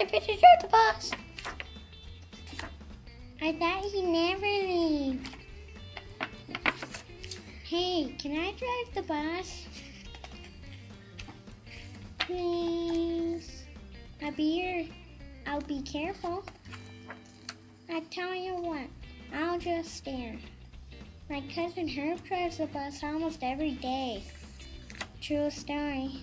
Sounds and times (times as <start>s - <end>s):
Speech: 0.0s - 1.2s, 3.4s - 5.2s, 7.7s - 9.7s, 12.3s - 16.5s, 17.9s - 20.5s, 21.3s - 24.3s, 25.2s - 26.2s
Music: 0.0s - 26.2s.